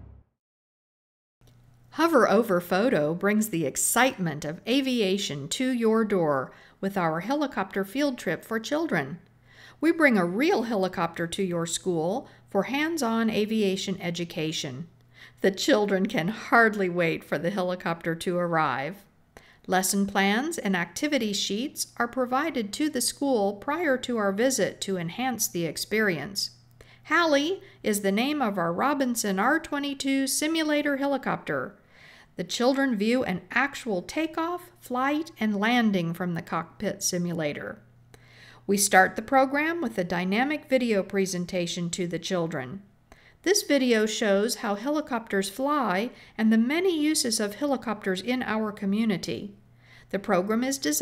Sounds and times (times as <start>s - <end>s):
Speech: 2.0s - 19.1s, 19.7s - 31.8s, 32.4s - 37.8s, 38.7s - 42.9s, 43.5s - 51.0s.